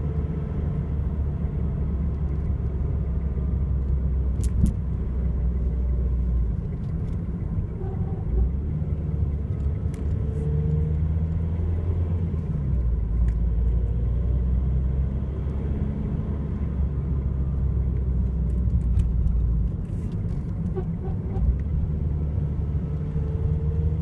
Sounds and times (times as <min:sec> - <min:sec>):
Vehicle: 0:00.0 - 0:24.0.